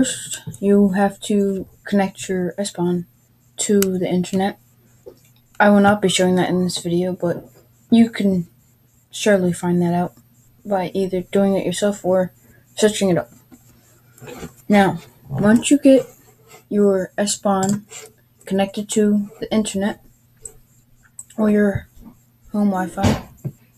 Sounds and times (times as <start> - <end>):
Speech: 0.0 - 4.6, 5.6 - 8.5, 9.1 - 13.3, 14.7 - 17.9, 18.5 - 20.0, 21.4 - 21.9, 22.5 - 23.3.